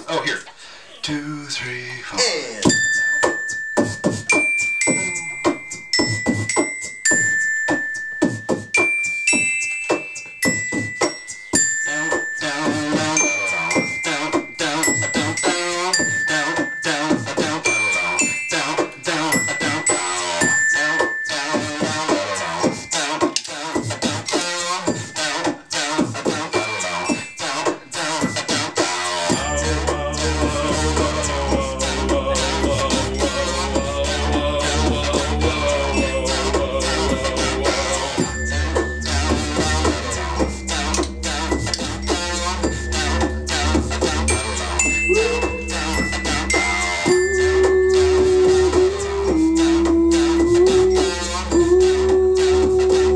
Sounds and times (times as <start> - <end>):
Inside, small room: 0.0 - 53.1
Music: 2.6 - 53.1
Singing: 11.9 - 20.5, 21.3 - 38.6, 44.3 - 53.1.